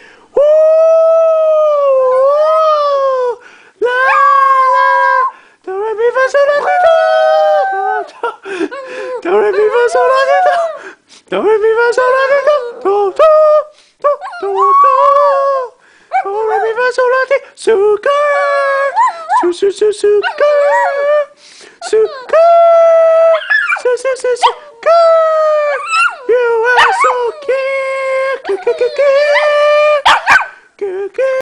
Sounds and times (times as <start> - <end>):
Male singing: 5.7 - 7.6, 9.2 - 10.7, 11.3 - 25.4, 26.3 - 30.0, 30.8 - 31.4.